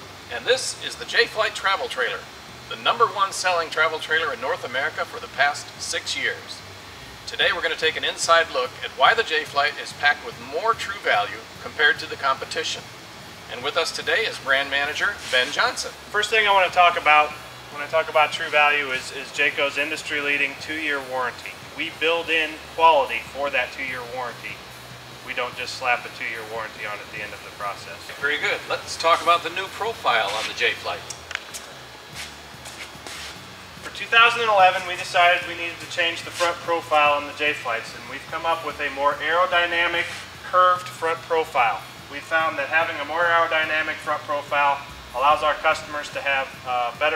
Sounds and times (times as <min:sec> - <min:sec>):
Music: 0:00.0 - 0:47.1
Speech: 0:00.3 - 0:06.6, 0:07.3 - 0:12.9, 0:13.5 - 0:24.6, 0:25.2 - 0:31.1, 0:33.9 - 0:47.1.